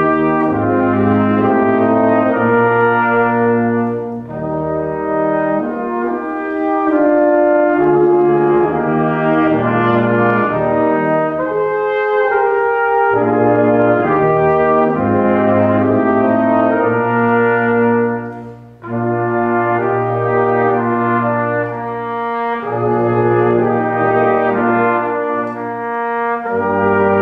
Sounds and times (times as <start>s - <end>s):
French horn: 0.0s - 27.2s.